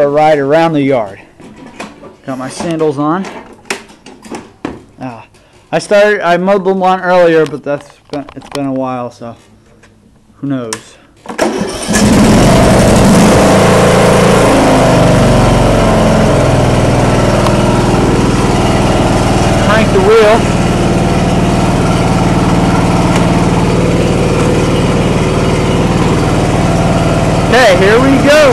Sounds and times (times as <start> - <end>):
Speech: 0.0 - 1.2, 2.3 - 3.4, 5.0 - 9.5, 10.4 - 11.0, 19.6 - 20.5, 27.5 - 28.5.